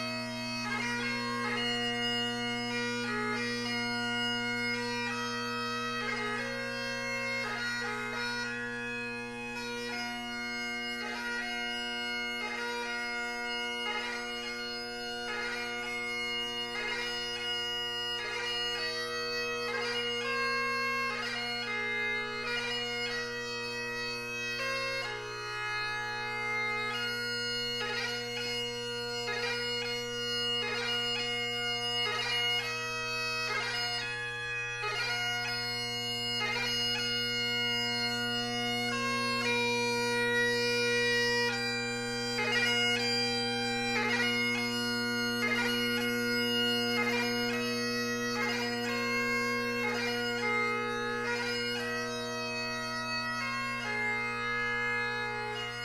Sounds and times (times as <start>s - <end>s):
Bagpipes: 0.0s - 55.8s.